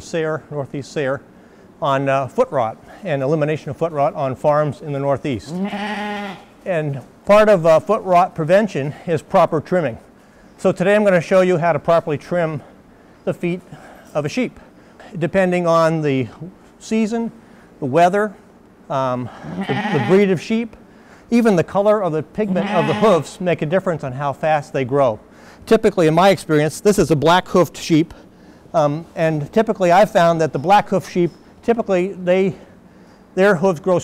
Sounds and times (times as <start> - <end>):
Speech: 0.0 - 1.2, 1.8 - 5.6, 6.6 - 10.0, 10.6 - 12.7, 13.3 - 32.7, 33.4 - 34.0
Bleat: 5.5 - 6.5, 19.4 - 20.3, 22.5 - 23.3.